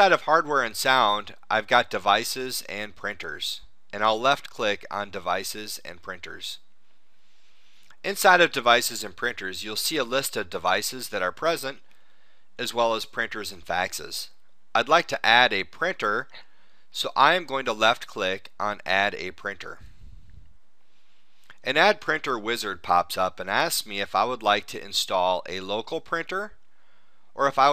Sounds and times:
Speech: 0.0 - 6.6, 8.0 - 11.8, 12.6 - 16.4, 17.0 - 19.9, 21.6 - 26.6, 27.4 - 27.7.

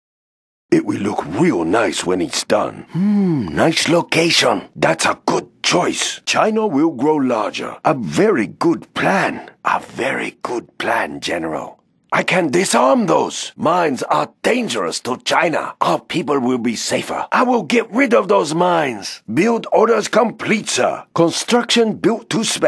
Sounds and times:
Speech: 0.7 - 22.6.

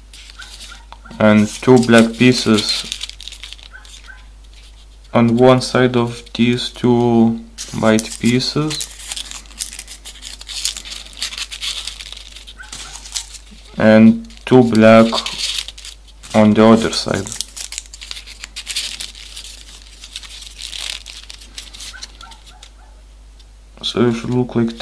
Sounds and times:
Speech: 1.2 - 2.9, 5.1 - 8.8, 13.8 - 15.3, 16.3 - 17.4, 23.8 - 24.8.

